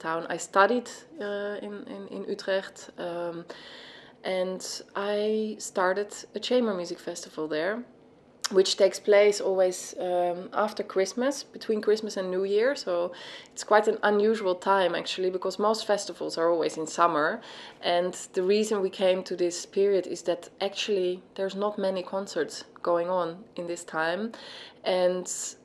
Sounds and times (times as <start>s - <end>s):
Speech: 0.0s - 3.5s, 4.2s - 7.9s, 8.5s - 25.6s.